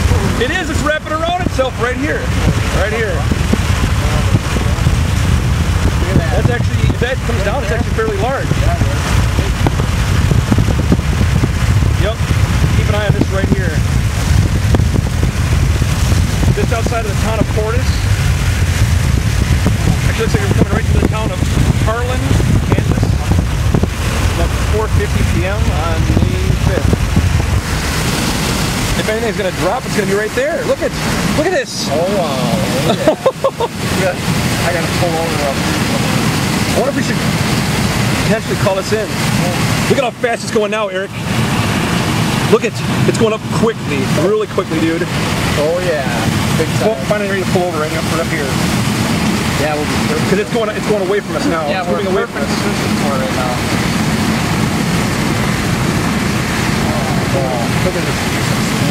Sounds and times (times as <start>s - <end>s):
Speech: 0.0s - 3.3s, 6.0s - 9.6s, 12.0s - 13.8s, 16.5s - 18.0s, 19.8s - 23.4s, 24.4s - 26.9s, 29.0s - 37.2s, 38.2s - 41.2s, 42.5s - 48.6s, 49.5s - 53.8s, 56.8s - 58.9s.